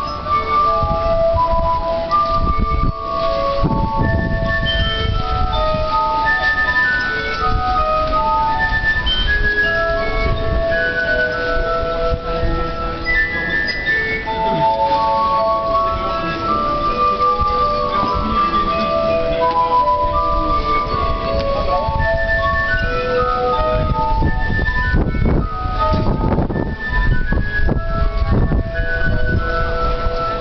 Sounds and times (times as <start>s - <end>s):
Independent music: 0.0s - 30.4s.